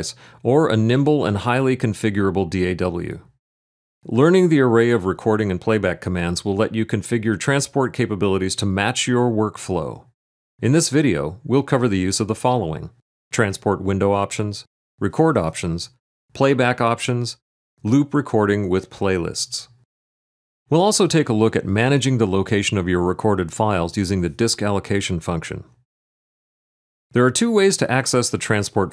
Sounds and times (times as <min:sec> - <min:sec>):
Speech: 0:00.0 - 0:03.4, 0:04.0 - 0:19.8, 0:20.7 - 0:25.8, 0:27.1 - 0:28.9.